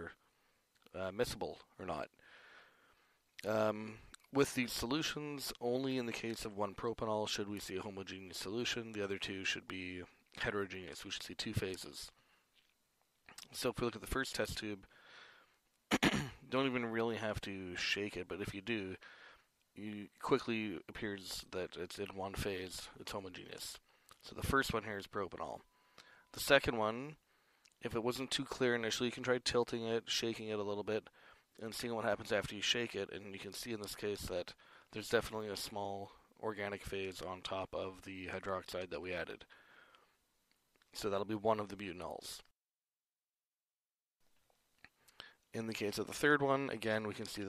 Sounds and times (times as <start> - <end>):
Speech: 0.0 - 0.2, 0.9 - 2.2, 3.4 - 12.2, 13.3 - 14.9, 16.2 - 19.0, 19.8 - 25.7, 26.3 - 27.2, 27.8 - 39.5, 41.0 - 42.6, 45.5 - 47.4.